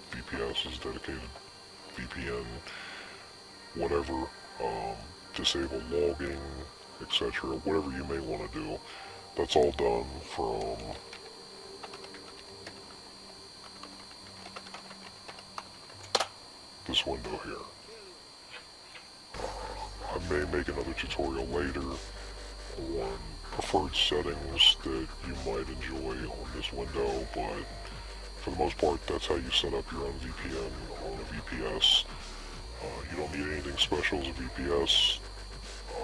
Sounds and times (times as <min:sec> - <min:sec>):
Music: 0:00.0 - 0:16.4, 0:19.3 - 0:36.0
Speech: 0:00.1 - 0:02.7, 0:03.8 - 0:08.8, 0:09.4 - 0:11.0, 0:16.8 - 0:18.1, 0:19.4 - 0:22.0, 0:22.8 - 0:27.8, 0:28.4 - 0:32.1, 0:32.8 - 0:35.2.